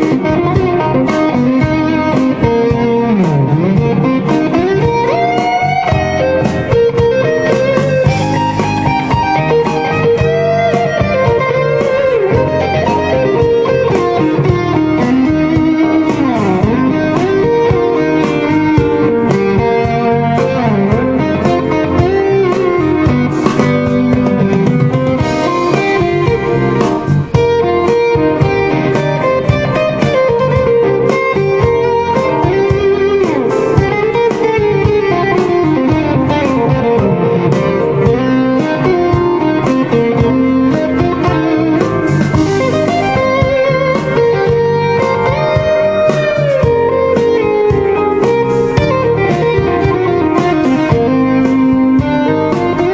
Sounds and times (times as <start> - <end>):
Guitar: 0.0 - 52.9.